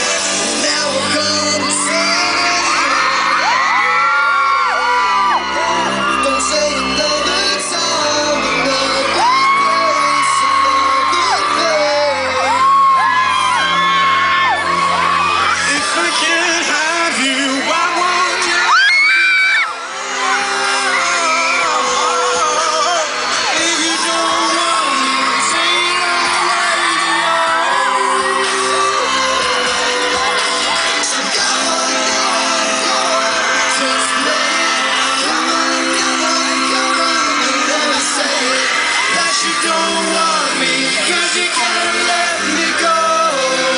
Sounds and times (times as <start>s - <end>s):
Singing: 0.0s - 43.7s.